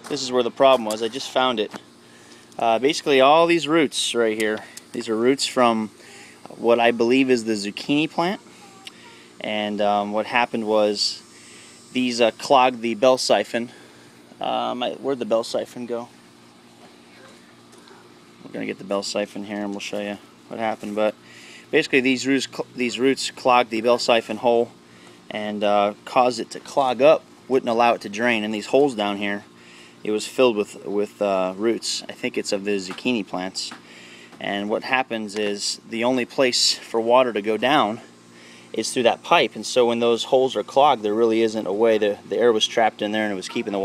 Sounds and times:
Speech: 0.0 - 1.8, 2.6 - 5.9, 6.5 - 8.4, 9.4 - 11.2, 12.0 - 13.7, 14.4 - 16.1, 18.4 - 21.2, 21.8 - 24.7, 25.3 - 33.8, 34.4 - 38.0, 38.8 - 43.8.

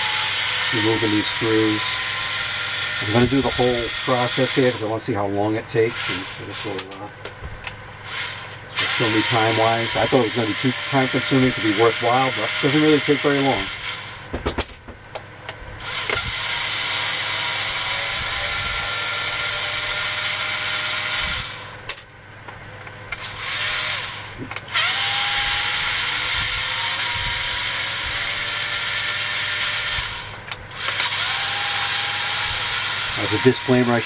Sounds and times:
Drill: 0.0 - 5.0, 5.8 - 7.0, 8.0 - 14.3, 15.8 - 22.0, 23.1 - 34.0.

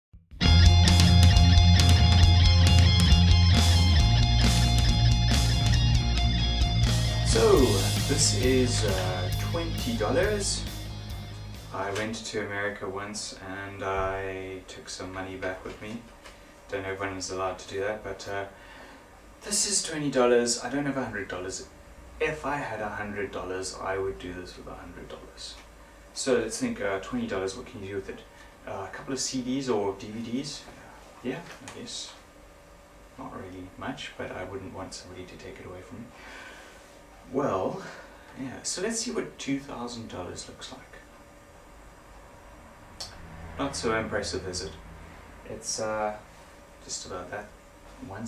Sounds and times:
Music: 0.2 - 12.0
Speech: 7.3 - 10.7, 11.7 - 16.1, 16.7 - 18.6, 19.4 - 32.2, 33.2 - 36.1, 37.3 - 41.1, 43.6 - 44.8, 45.4 - 48.2.

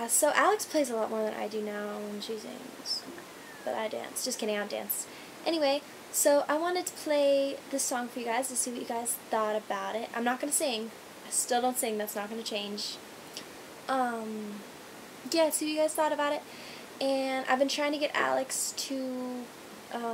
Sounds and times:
Speech: 0.0 - 13.0, 13.9 - 14.6, 15.3 - 16.4, 17.0 - 20.1.

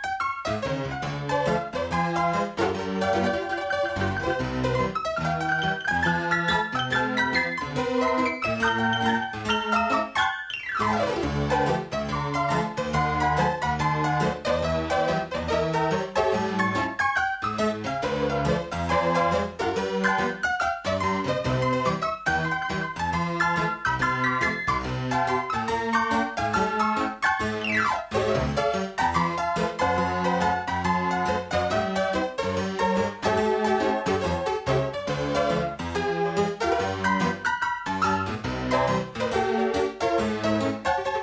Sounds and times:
Music: 0.0 - 41.2.

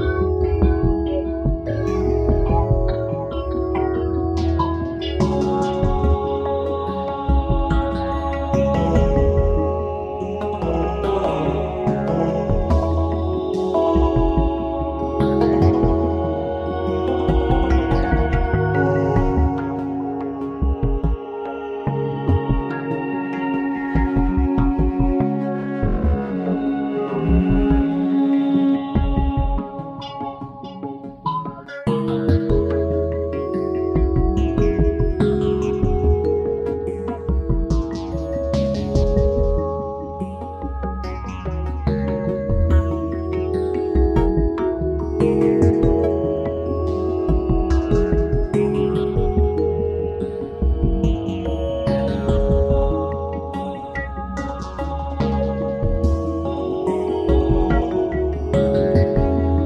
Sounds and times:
New-age music: 0.0 - 59.6.

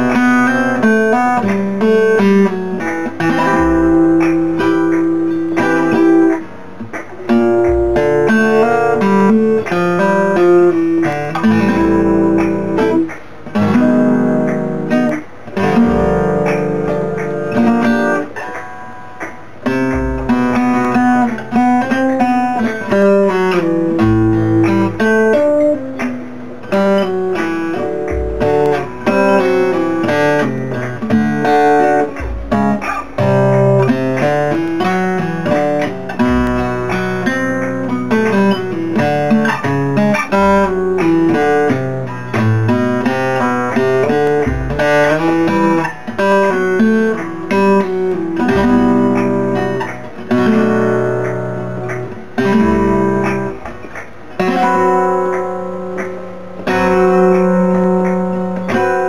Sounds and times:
Acoustic guitar: 0.0 - 59.0
Strum: 0.0 - 59.0.

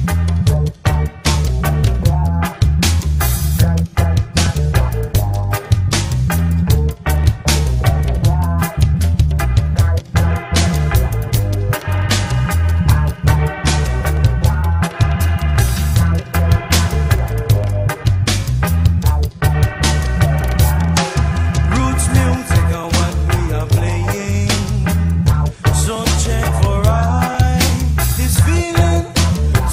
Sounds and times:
Music: 0.0 - 29.7.

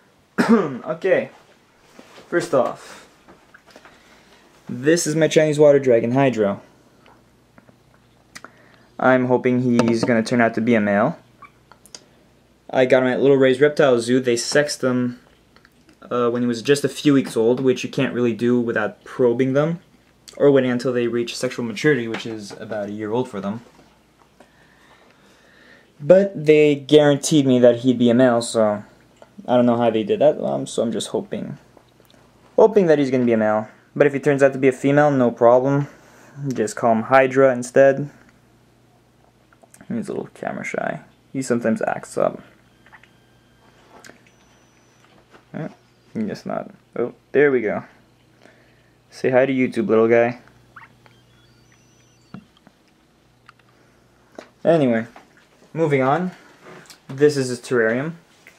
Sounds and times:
Speech: 0.7 - 1.4, 2.3 - 3.1, 4.7 - 6.7, 9.0 - 11.2, 12.7 - 15.2, 16.0 - 23.7, 26.0 - 31.6, 32.6 - 38.2, 39.8 - 42.5, 45.5 - 48.0, 49.1 - 50.5, 54.6 - 56.4, 57.1 - 58.2.

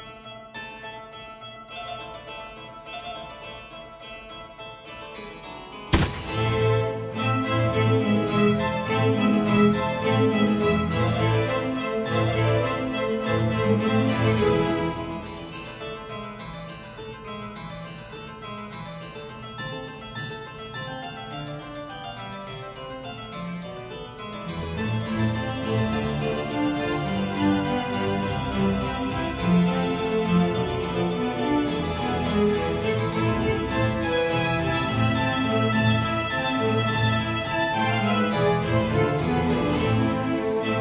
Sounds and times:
Harpsichord: 0.0 - 40.8.

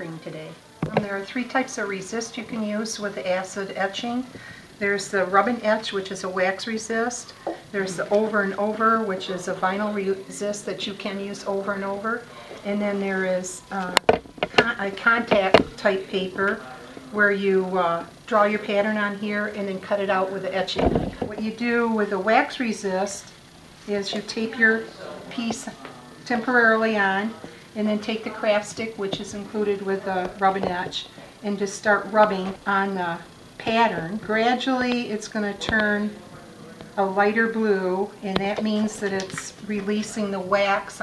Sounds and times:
Speech: 0.0 - 23.3, 23.9 - 41.0.

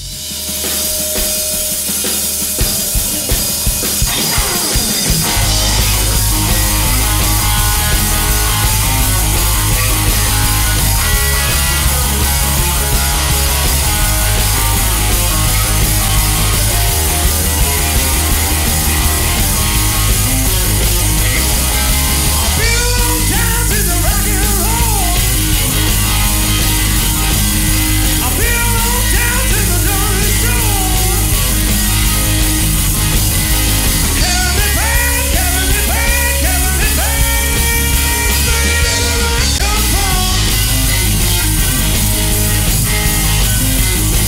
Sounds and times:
Rock and roll: 0.0 - 44.2.

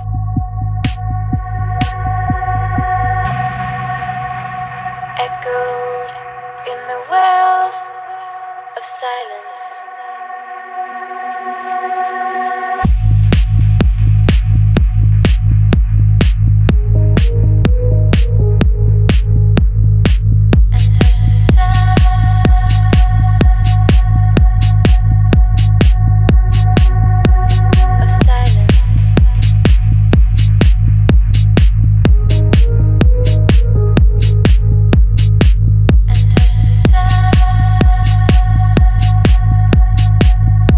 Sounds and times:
Music: 0.0 - 40.7.

